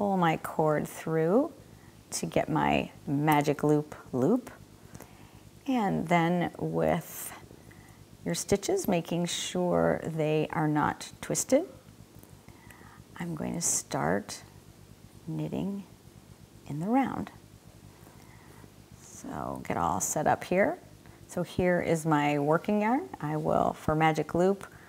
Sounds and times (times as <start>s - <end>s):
Speech: 0.0s - 4.6s, 5.7s - 7.4s, 8.2s - 11.8s, 13.2s - 14.5s, 15.3s - 15.9s, 16.7s - 17.4s, 19.0s - 24.7s.